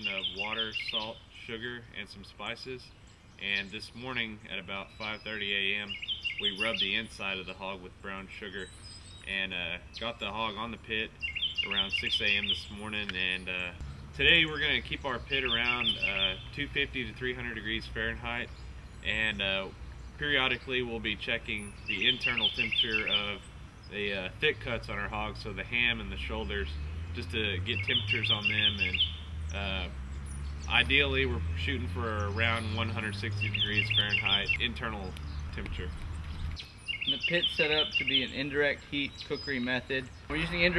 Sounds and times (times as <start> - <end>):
Speech: 0.0 - 29.0, 29.6 - 30.0, 30.7 - 36.0, 37.1 - 40.7.